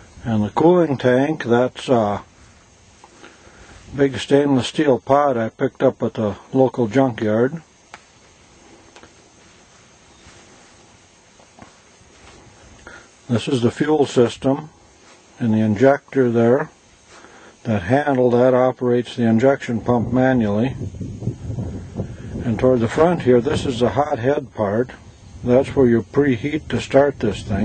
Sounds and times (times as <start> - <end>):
Speech: 0.2 - 2.3, 3.9 - 7.7, 13.3 - 14.8, 15.4 - 16.8, 17.6 - 20.8, 22.4 - 27.6.